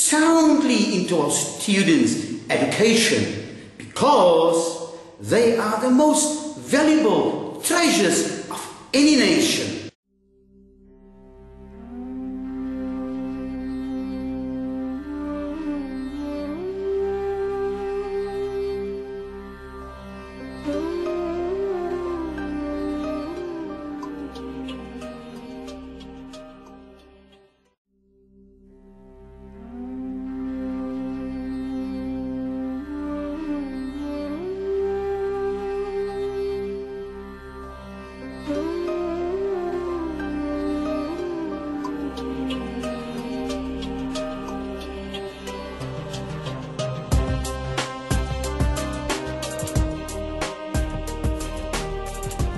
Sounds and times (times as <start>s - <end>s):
Speech: 0.0s - 9.9s
Music: 0.0s - 52.5s.